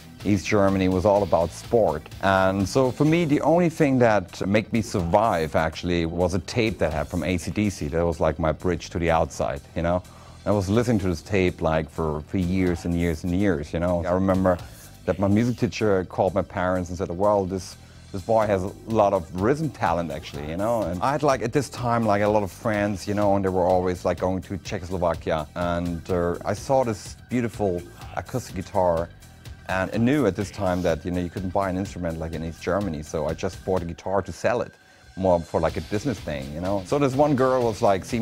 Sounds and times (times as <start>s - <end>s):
Music: 0.0s - 38.2s
Speech: 0.2s - 29.1s, 29.7s - 38.2s.